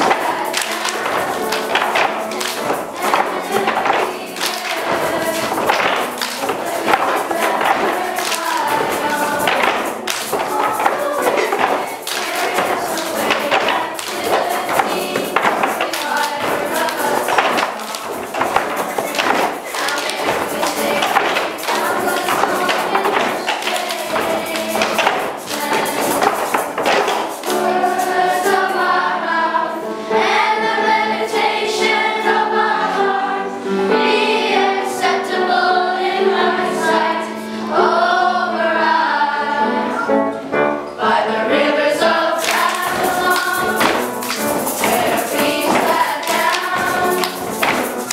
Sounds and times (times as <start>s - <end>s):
Clapping: 0.0s - 27.7s, 42.4s - 48.1s
Choir: 0.0s - 48.1s.